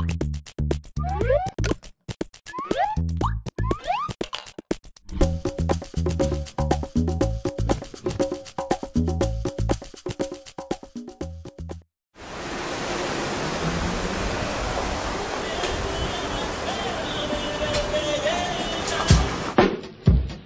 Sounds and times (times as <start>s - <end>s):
Music: 0.0s - 11.9s, 16.7s - 20.4s
Outside, urban or manmade: 11.0s - 20.4s.